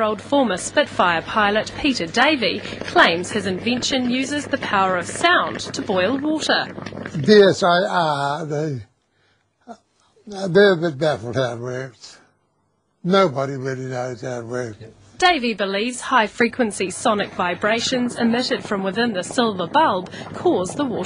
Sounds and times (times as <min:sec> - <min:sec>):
Boiling: 0:00.0 - 0:09.3, 0:13.0 - 0:21.0
Speech: 0:07.2 - 0:08.9, 0:10.3 - 0:12.2, 0:13.0 - 0:21.0.